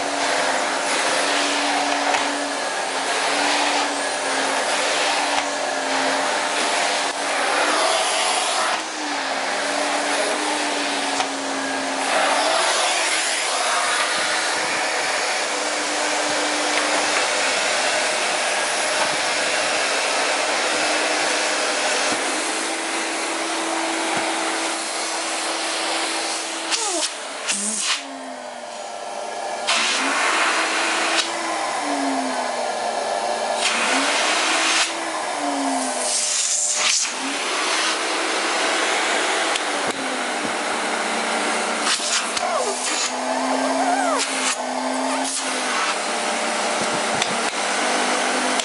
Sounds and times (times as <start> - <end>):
Vacuum cleaner: 0.0 - 48.6.